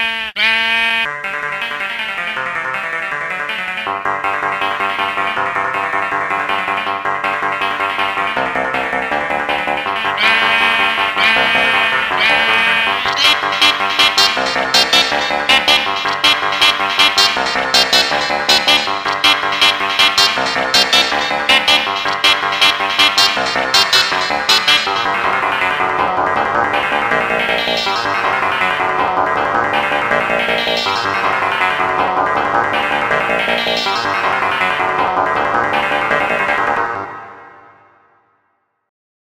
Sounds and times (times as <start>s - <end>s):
Music: 0.1s - 38.9s.